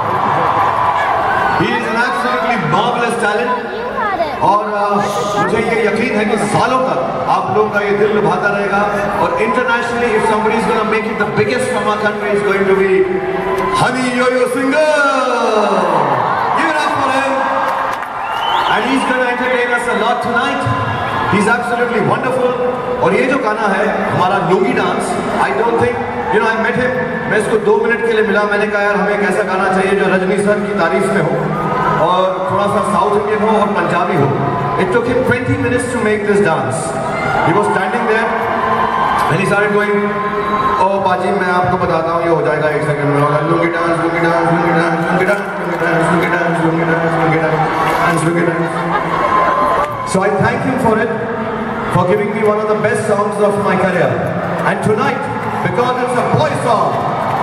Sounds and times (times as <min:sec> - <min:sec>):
Speech: 0:01.6 - 0:13.1.